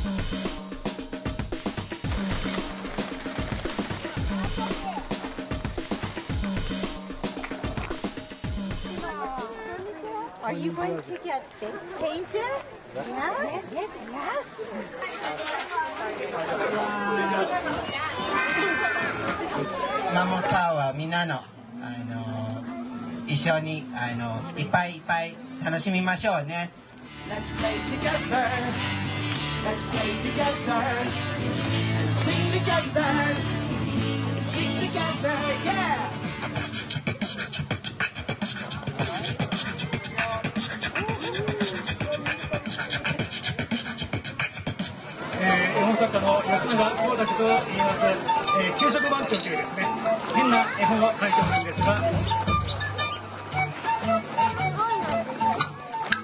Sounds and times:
Music: 0.0s - 10.2s, 26.8s - 56.2s.

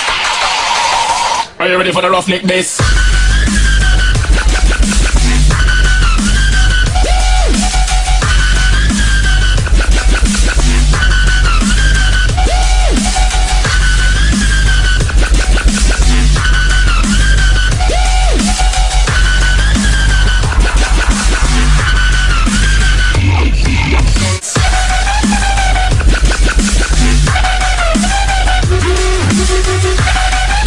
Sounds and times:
Dubstep: 2.5s - 30.6s.

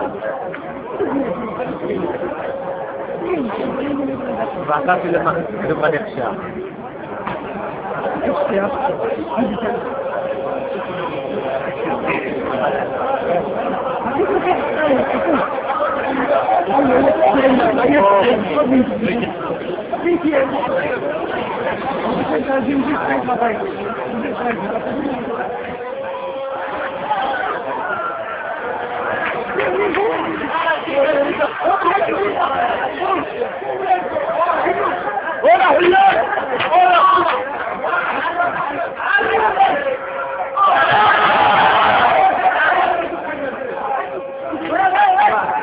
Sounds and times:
Speech: 0.0s - 45.6s.

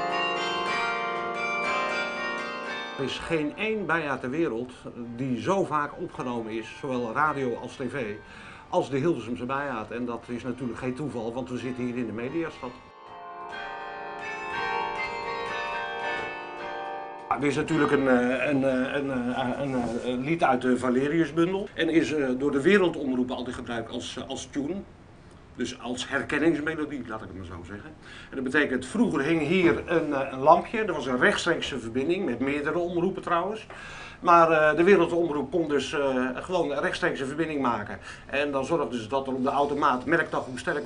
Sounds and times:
Speech: 3.0s - 12.8s, 17.3s - 24.9s, 25.6s - 40.8s.

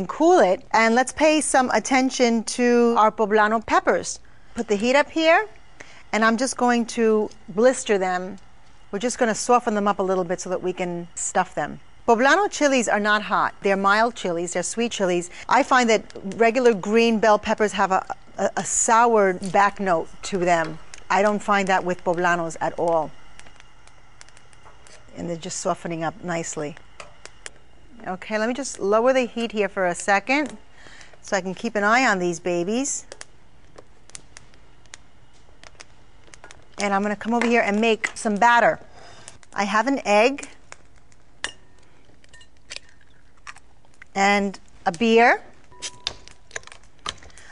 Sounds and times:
Speech: 9.0s - 23.1s, 28.0s - 30.6s, 31.3s - 33.1s, 36.8s - 38.8s, 39.6s - 40.5s, 44.2s - 45.5s.

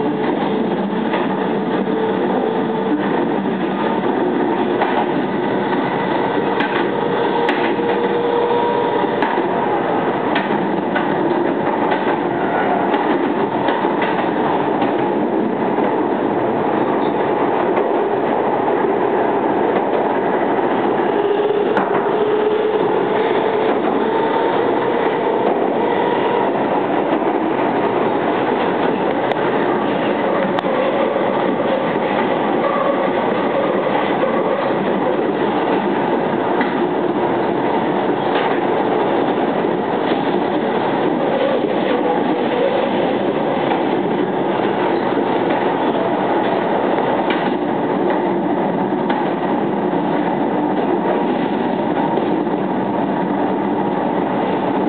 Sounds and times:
Outside, urban or manmade: 0.0s - 54.8s
Train: 0.0s - 54.8s.

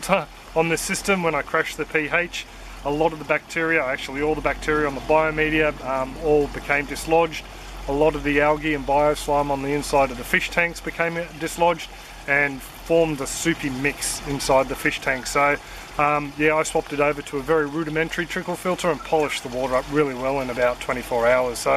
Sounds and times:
Speech: 0.0s - 21.7s.

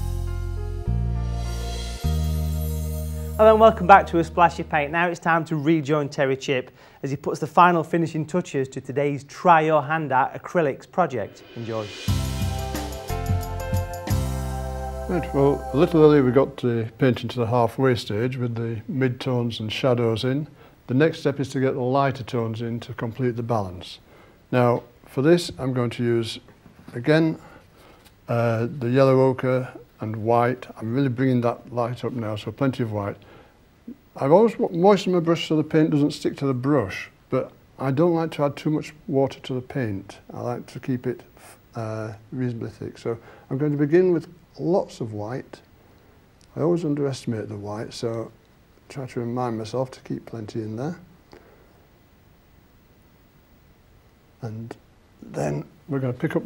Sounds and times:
Speech: 3.4s - 12.1s, 15.1s - 27.4s, 28.3s - 33.2s, 33.9s - 45.7s, 46.5s - 51.1s, 54.4s - 56.4s.

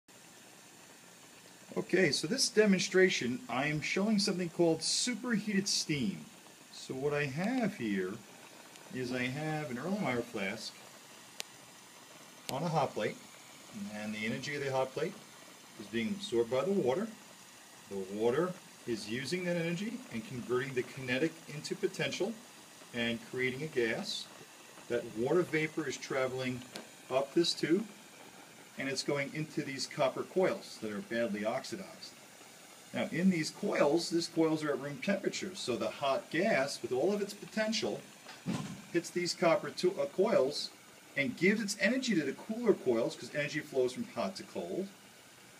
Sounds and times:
Speech: 1.7s - 8.2s, 8.9s - 10.8s, 12.5s - 15.2s, 15.8s - 17.2s, 17.9s - 24.3s, 24.9s - 27.9s, 28.8s - 32.2s, 32.9s - 38.1s, 38.9s - 44.9s.

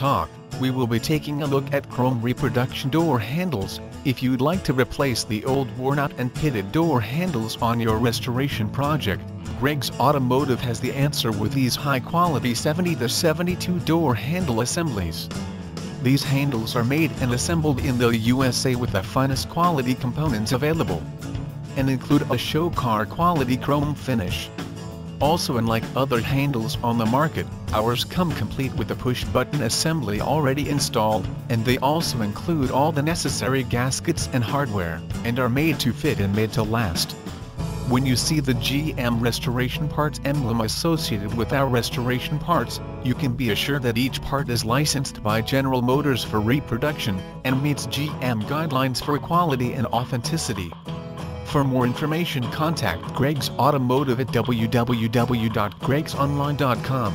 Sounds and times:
Speech: 0.0s - 15.4s, 16.0s - 21.1s, 21.8s - 24.5s, 25.2s - 37.2s, 37.8s - 50.8s, 51.5s - 57.1s
Music: 0.0s - 57.1s.

